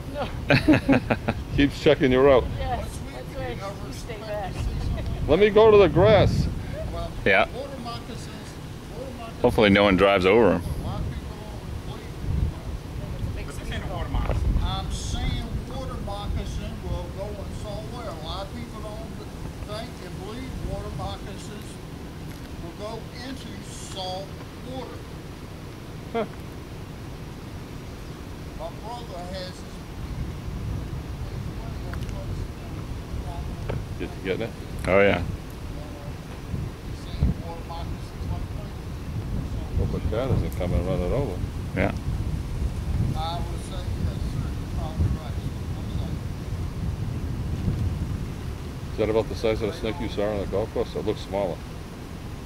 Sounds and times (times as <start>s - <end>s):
Speech: 1.6s - 21.8s, 22.6s - 25.0s, 28.6s - 29.8s, 31.4s - 36.2s, 37.0s - 38.8s, 39.5s - 42.0s, 43.1s - 46.2s, 49.0s - 51.6s.